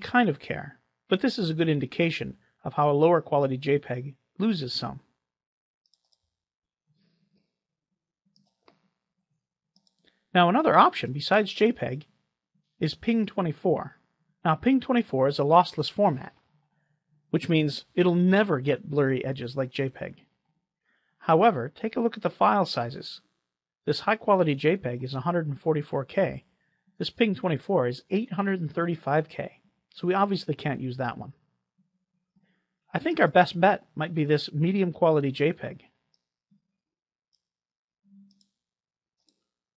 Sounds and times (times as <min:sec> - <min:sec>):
Narration, monologue: 0:00.0 - 0:39.7.